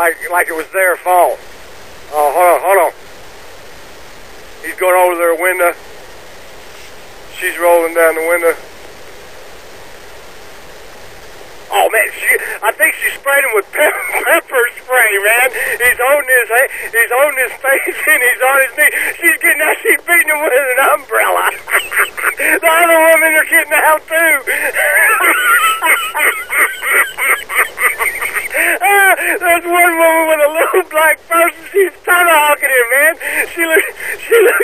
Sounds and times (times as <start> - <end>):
Speech: 0.0 - 1.4, 2.1 - 3.0, 4.6 - 5.8, 7.3 - 8.6, 11.7 - 26.0, 28.6 - 34.6.